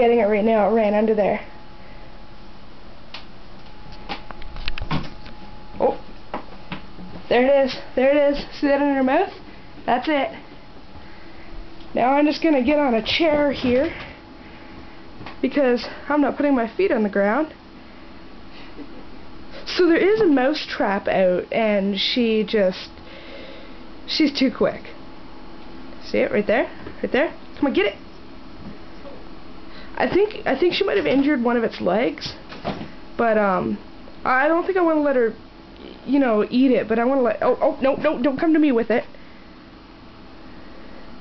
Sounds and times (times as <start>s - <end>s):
Speech: 0.0s - 1.5s, 5.8s - 6.0s, 7.3s - 10.4s, 11.9s - 14.0s, 15.4s - 17.6s, 19.6s - 22.9s, 24.1s - 25.0s, 26.0s - 28.0s, 30.0s - 32.4s, 33.2s - 39.1s.